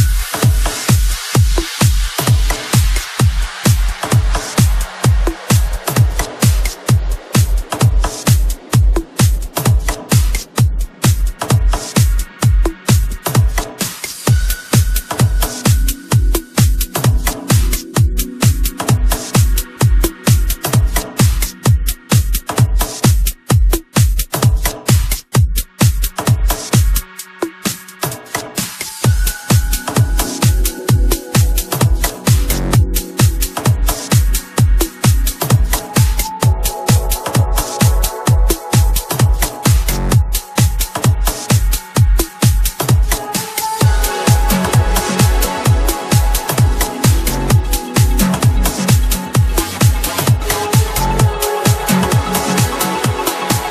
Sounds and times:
Drum and bass: 0:00.0 - 0:53.7.

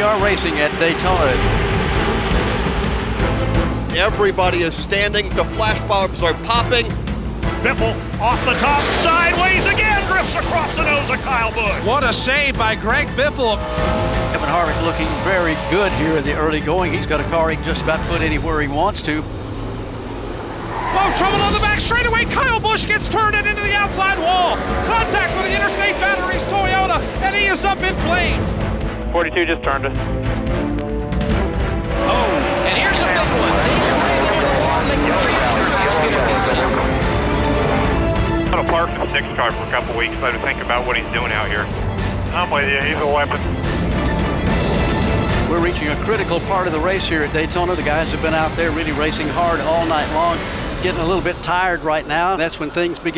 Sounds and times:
Speech: 0:00.0 - 0:01.4, 0:07.7 - 0:13.6, 0:21.0 - 0:28.5, 0:38.6 - 0:41.7, 0:45.5 - 0:53.1
Music: 0:00.0 - 0:53.1.

